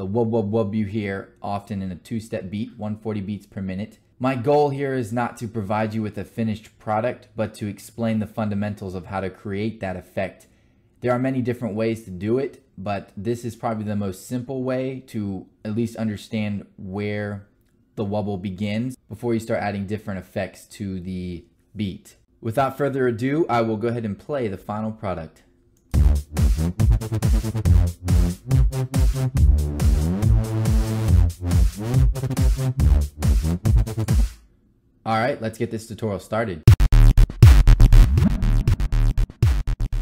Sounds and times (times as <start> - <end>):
Speech: 0.0 - 25.5, 35.0 - 36.7
Music: 25.9 - 34.4, 36.7 - 40.0.